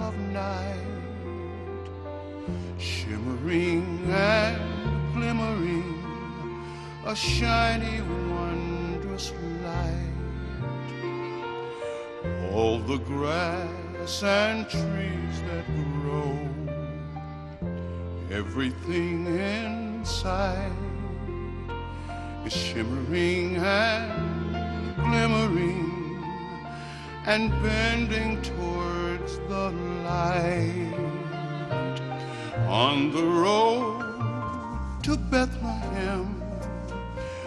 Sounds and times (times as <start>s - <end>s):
Christmas music: 0.0s - 37.4s.